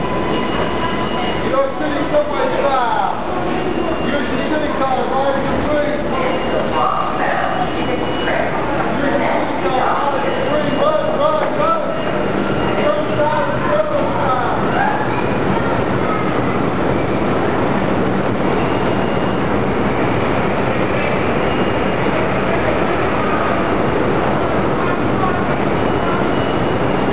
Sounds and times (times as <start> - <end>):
Railroad car, train wagon: 0.0 - 27.1
Subway, metro, underground: 0.0 - 27.1
Train: 0.0 - 27.1.